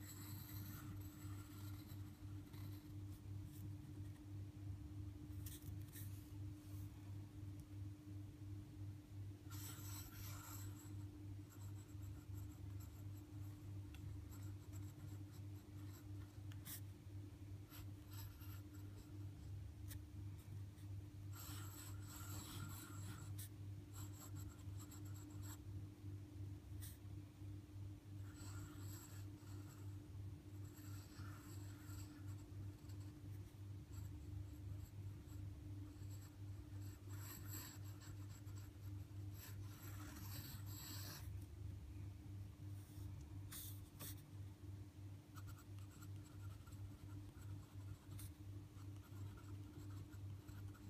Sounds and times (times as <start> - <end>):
Writing: 0.0 - 4.2, 5.3 - 6.9, 9.5 - 16.9, 17.7 - 25.6, 26.8 - 27.0, 28.2 - 41.4, 42.8 - 44.3, 45.4 - 50.9.